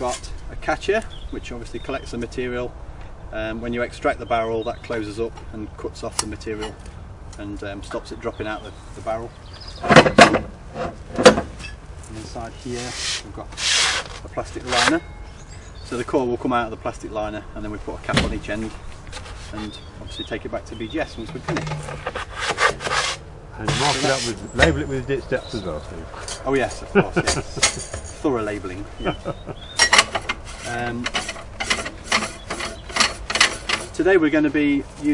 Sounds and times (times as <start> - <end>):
Speech: 0.0 - 2.7, 3.3 - 6.8, 7.4 - 9.4, 12.1 - 13.6, 14.2 - 15.1, 15.9 - 18.8, 19.5 - 21.7, 23.6 - 27.6, 28.2 - 29.2, 30.7 - 31.2, 33.9 - 35.1.